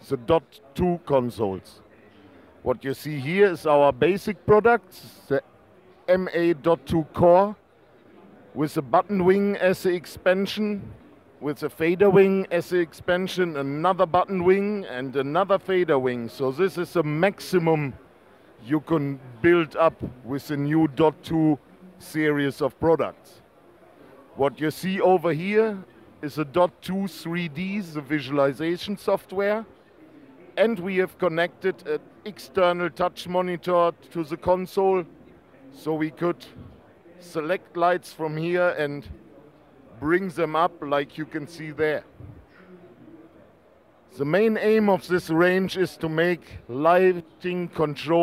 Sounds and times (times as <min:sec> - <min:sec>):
Speech: 0:00.0 - 0:48.2.